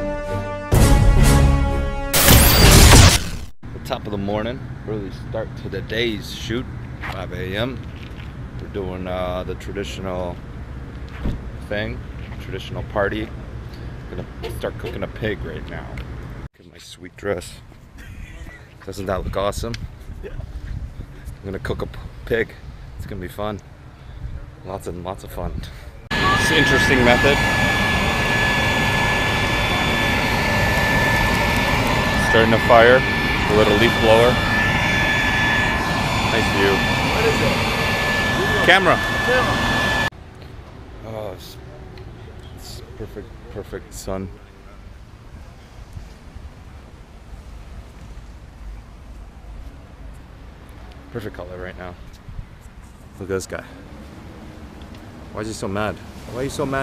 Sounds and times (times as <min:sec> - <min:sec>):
Speech: 0:03.8 - 0:07.8, 0:08.6 - 0:10.4, 0:11.6 - 0:13.3, 0:14.1 - 0:16.0, 0:16.6 - 0:17.6, 0:18.2 - 0:20.4, 0:21.4 - 0:23.6, 0:24.6 - 0:27.4, 0:32.2 - 0:34.4, 0:36.3 - 0:37.6, 0:38.4 - 0:39.6, 0:41.0 - 0:44.9, 0:51.1 - 0:52.0, 0:53.2 - 0:53.8, 0:55.4 - 0:56.8
Laughter: 0:18.0 - 0:18.8.